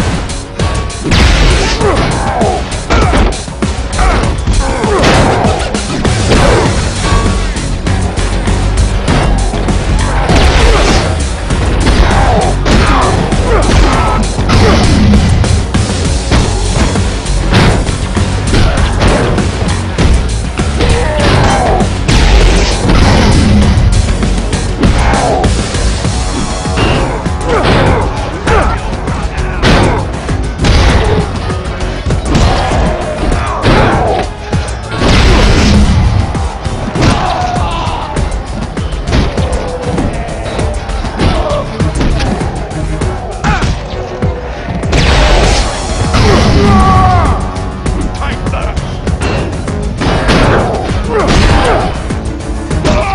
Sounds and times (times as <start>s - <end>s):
Music: 0.0s - 53.1s.